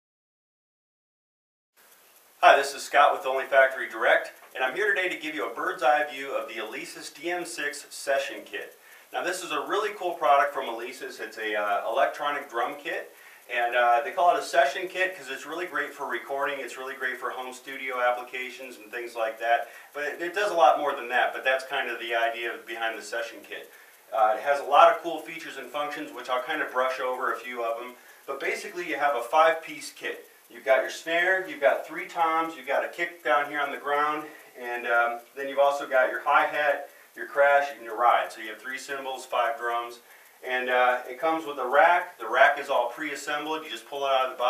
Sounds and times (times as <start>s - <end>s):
Speech: 2.4s - 44.4s.